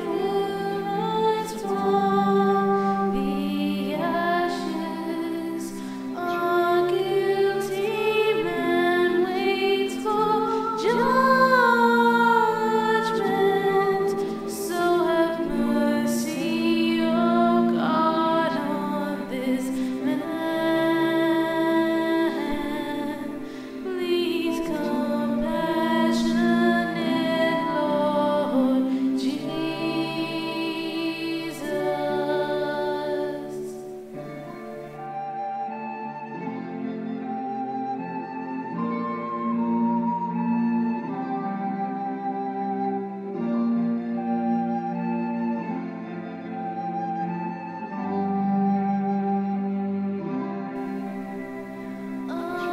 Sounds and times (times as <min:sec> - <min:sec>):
Lullaby: 0:00.0 - 0:52.7.